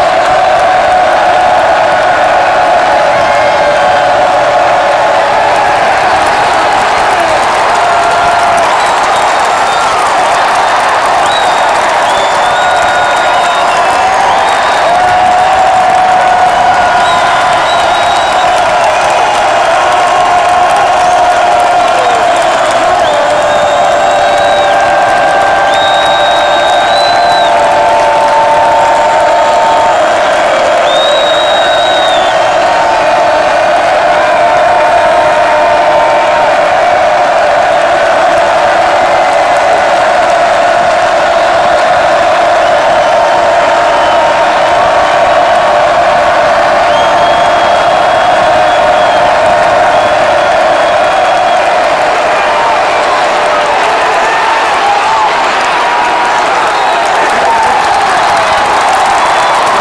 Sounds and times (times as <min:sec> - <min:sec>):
Crowd: 0:00.0 - 0:59.8.